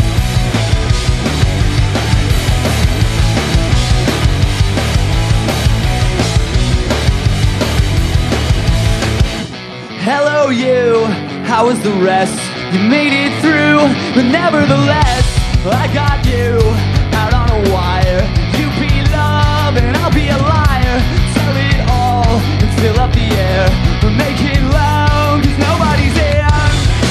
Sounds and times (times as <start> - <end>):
Music: 0.0 - 27.1.